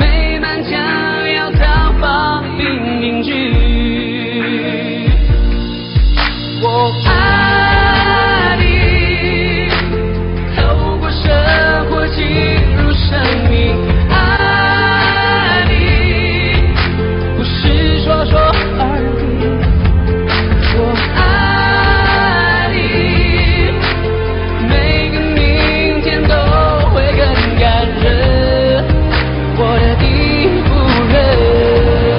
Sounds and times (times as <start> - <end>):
Singing: 0.0 - 5.6, 6.6 - 32.1
Pop music: 0.0 - 32.1.